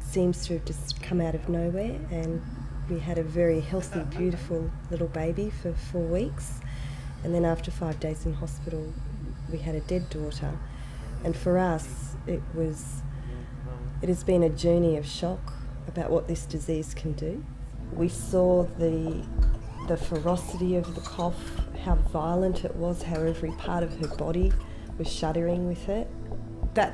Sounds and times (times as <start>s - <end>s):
Speech: 0.1s - 6.6s, 11.2s - 17.4s, 19.9s - 26.1s
Music: 17.7s - 26.9s.